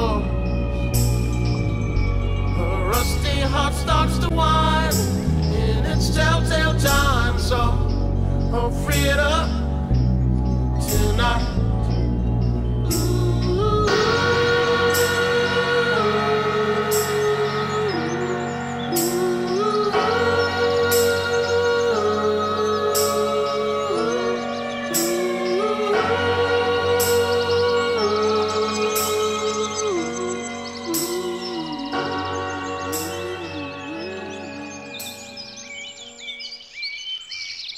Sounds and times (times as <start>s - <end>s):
Music: 0.0s - 36.7s.